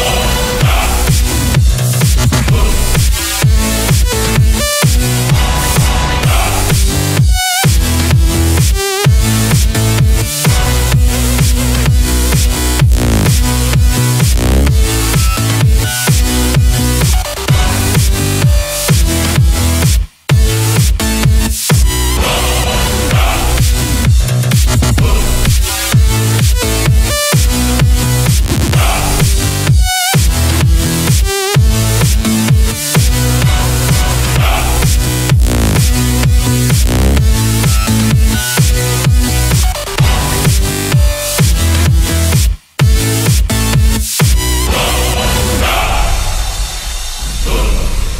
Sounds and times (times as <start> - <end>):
Electronic dance music: 0.0 - 48.1.